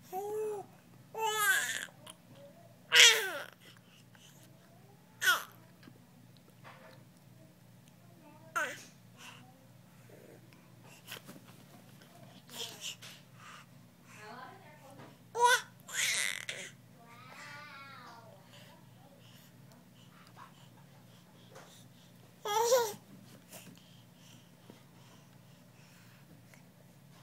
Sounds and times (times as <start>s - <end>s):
Babbling: 0.1s - 1.9s, 2.9s - 3.6s, 5.2s - 5.6s, 8.6s - 8.9s, 15.4s - 18.3s, 22.4s - 23.0s.